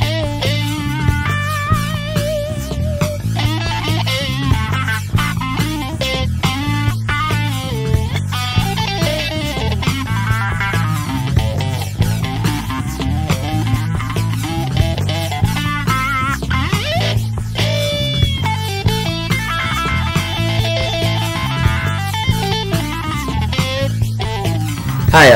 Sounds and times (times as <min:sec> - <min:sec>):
Bass guitar: 0:00.0 - 0:25.3
Electric guitar: 0:00.0 - 0:25.3.